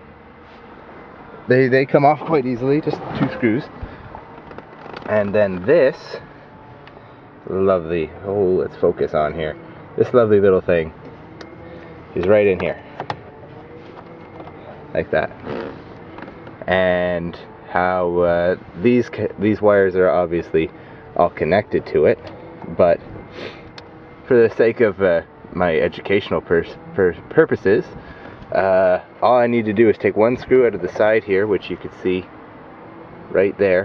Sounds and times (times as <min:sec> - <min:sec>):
Vehicle: 0:00.0 - 0:33.8
Speech: 0:01.5 - 0:03.7, 0:05.1 - 0:06.2, 0:07.5 - 0:10.9, 0:12.2 - 0:12.8, 0:15.0 - 0:15.3, 0:16.7 - 0:23.0, 0:24.3 - 0:27.9, 0:28.5 - 0:32.3, 0:33.3 - 0:33.8.